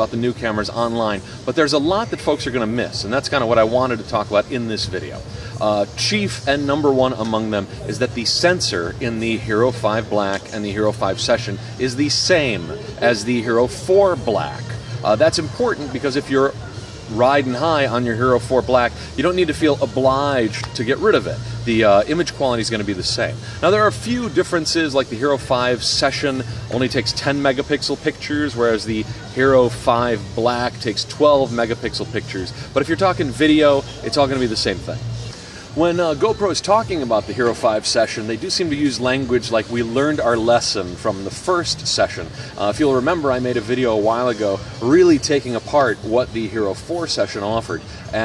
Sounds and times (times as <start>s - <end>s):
Speech: 0.0s - 35.1s, 35.7s - 48.2s.